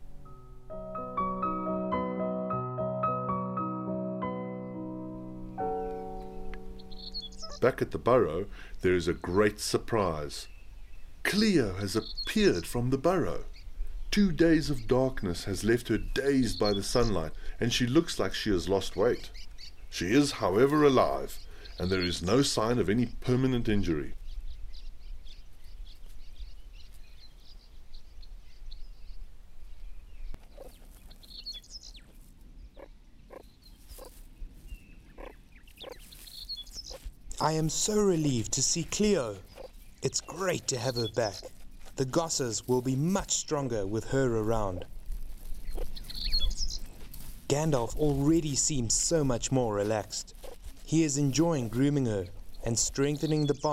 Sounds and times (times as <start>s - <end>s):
Animal: 7.3s - 7.7s, 30.4s - 34.2s, 35.1s - 37.5s, 39.0s - 42.0s
Speech: 7.6s - 10.5s, 11.2s - 13.5s, 14.2s - 19.3s, 19.9s - 24.2s, 37.4s - 44.9s, 47.5s - 53.7s.